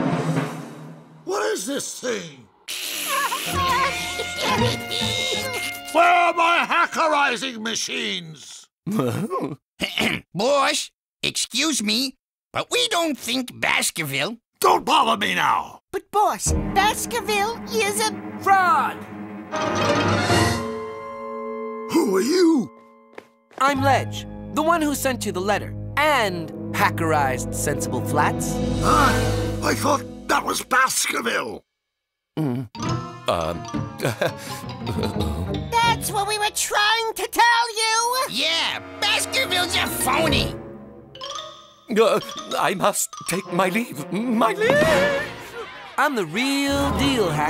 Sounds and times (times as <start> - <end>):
Music: 0.0 - 1.3, 3.5 - 6.5, 16.5 - 30.7, 32.8 - 37.0, 38.5 - 45.7, 46.6 - 47.4
Speech: 1.3 - 2.5, 4.4 - 19.0, 23.6 - 31.6, 41.9 - 44.9, 46.0 - 47.4.